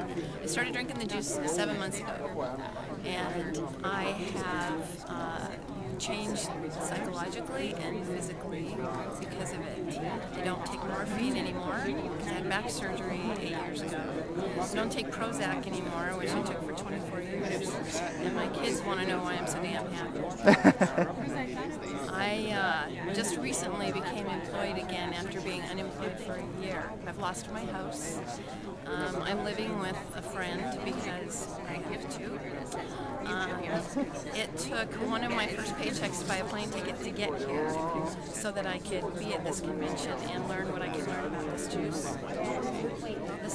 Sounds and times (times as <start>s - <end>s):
Inside, public space: 0.0s - 43.5s
Speech: 0.0s - 43.5s.